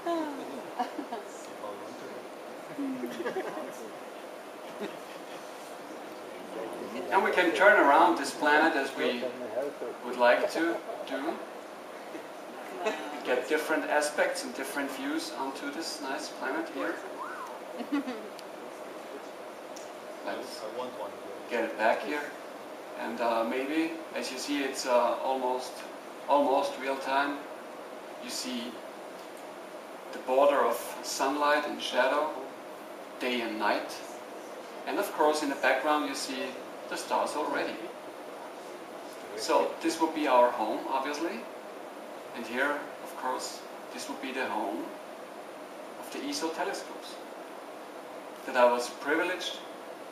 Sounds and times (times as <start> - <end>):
Speech: 6.4 - 11.4.